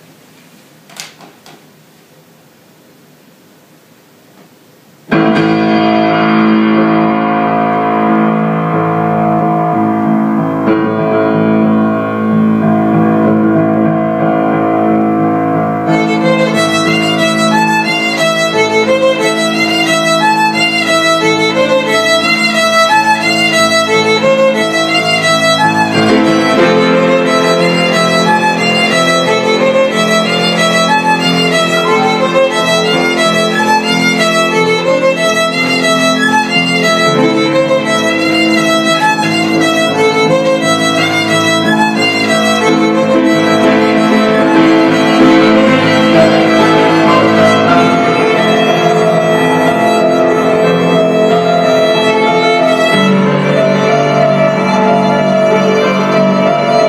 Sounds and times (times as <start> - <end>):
Violin, fiddle: 15.2 - 56.8.